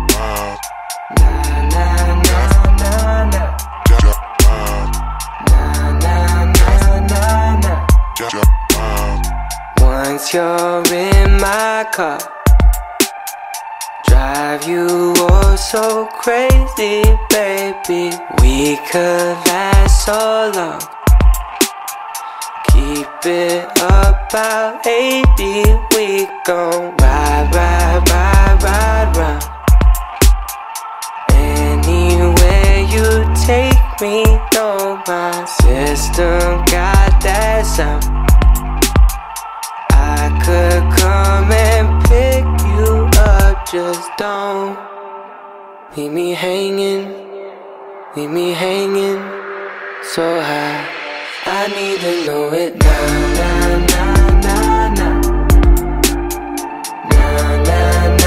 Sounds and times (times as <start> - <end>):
Music: 0.0 - 58.2.